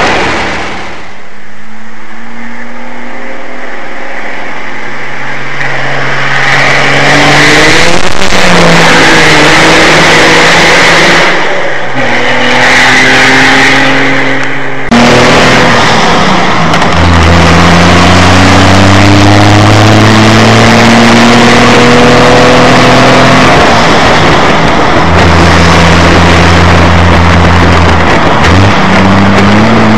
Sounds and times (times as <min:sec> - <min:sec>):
Race car, auto racing: 0:00.0 - 0:29.9.